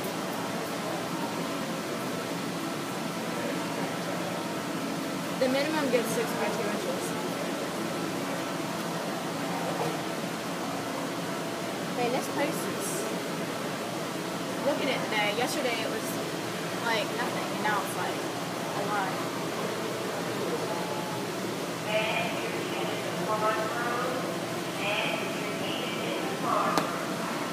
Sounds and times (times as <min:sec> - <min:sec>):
Hubbub, speech noise, speech babble: 0:00.0 - 0:27.5
Speech: 0:05.4 - 0:07.6, 0:12.0 - 0:13.1, 0:21.9 - 0:27.0.